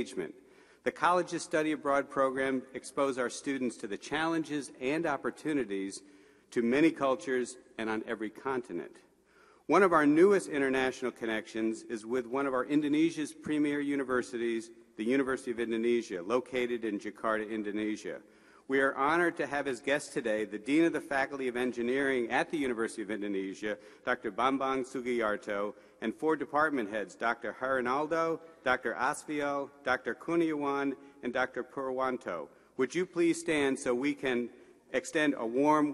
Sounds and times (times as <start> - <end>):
Male speech, man speaking: 0.0 - 9.0, 9.7 - 35.9
Narration, monologue: 0.0 - 35.9.